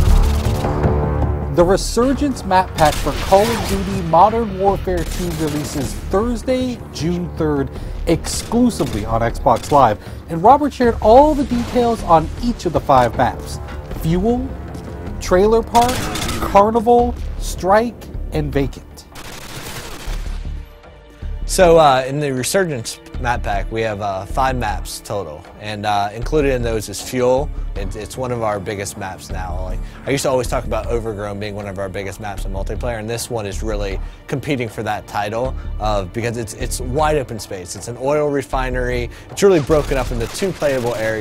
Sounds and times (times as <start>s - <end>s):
Music: 0.0s - 41.2s
Speech: 1.6s - 14.5s, 15.2s - 19.1s, 21.5s - 41.2s.